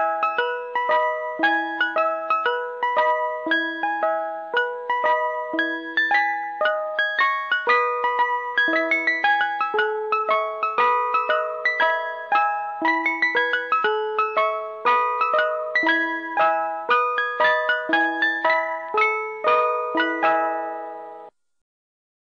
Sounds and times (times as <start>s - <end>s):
Music: 0.0s - 21.4s.